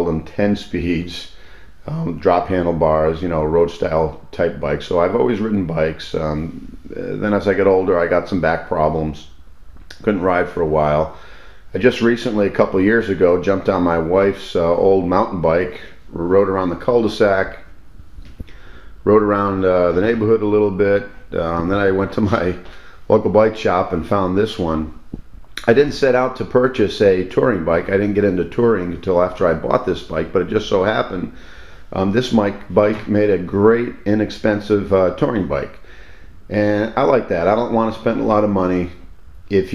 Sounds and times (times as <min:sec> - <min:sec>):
Speech: 0:00.0 - 0:17.8, 0:19.0 - 0:25.0, 0:25.6 - 0:35.8, 0:36.5 - 0:39.7.